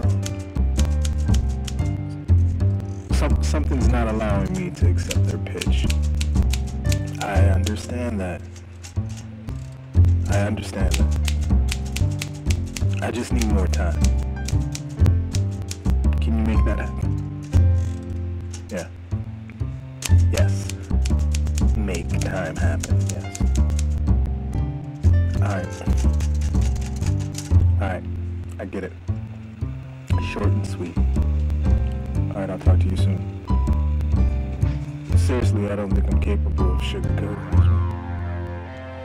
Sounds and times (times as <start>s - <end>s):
Soundtrack music: 0.0s - 39.0s
Speech: 3.1s - 5.9s, 7.2s - 8.5s, 10.3s - 11.0s, 13.0s - 14.0s, 16.2s - 17.1s, 18.7s - 18.9s, 20.3s - 20.8s, 21.8s - 23.3s, 25.4s - 25.9s, 27.8s - 29.0s, 30.1s - 31.0s, 32.3s - 33.2s, 35.1s - 37.7s.